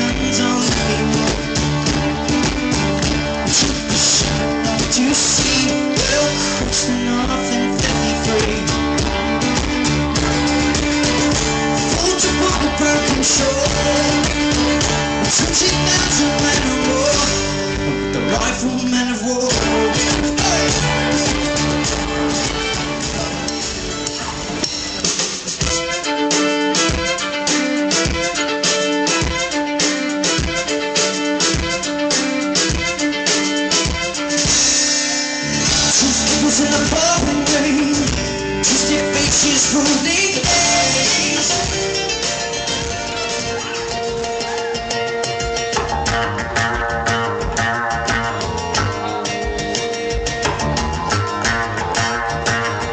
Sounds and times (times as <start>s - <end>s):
Bowed string instrument: 0.0s - 52.9s.